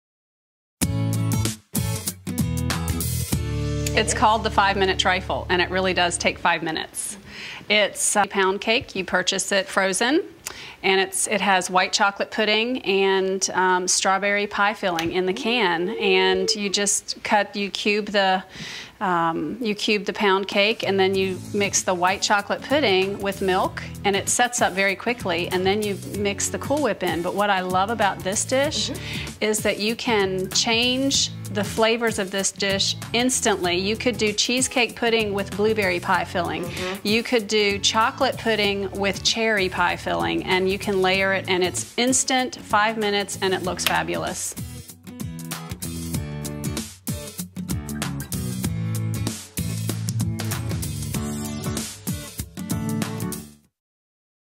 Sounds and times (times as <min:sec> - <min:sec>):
Music: 0:00.8 - 0:07.2, 0:19.8 - 0:53.8
Speech: 0:03.9 - 0:44.6.